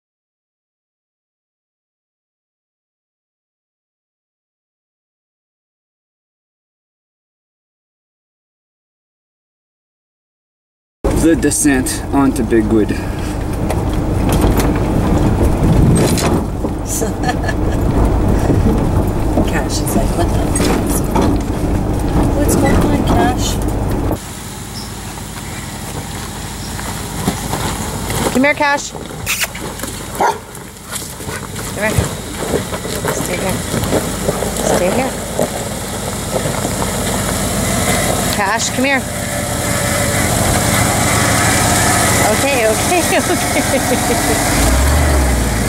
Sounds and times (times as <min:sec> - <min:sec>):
Speech: 0:11.1 - 0:13.0, 0:19.4 - 0:21.2, 0:22.4 - 0:23.6, 0:28.3 - 0:29.0, 0:31.8 - 0:32.1, 0:33.0 - 0:33.6, 0:34.6 - 0:35.2, 0:38.4 - 0:39.1, 0:42.2 - 0:43.5.